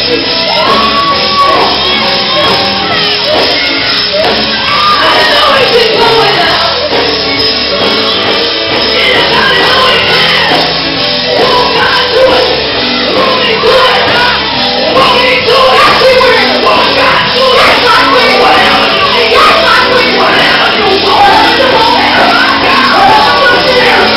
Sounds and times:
Music: 0:00.0 - 0:24.1
Female singing: 0:04.6 - 0:07.1, 0:08.8 - 0:24.1.

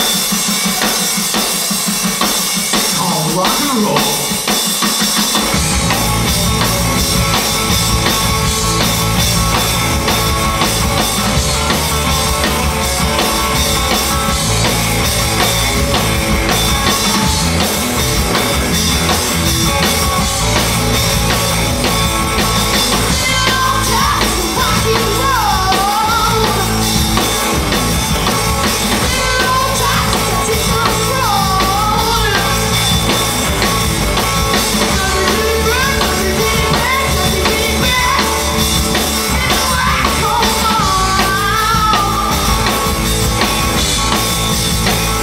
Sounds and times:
Rock and roll: 0:00.0 - 0:45.2.

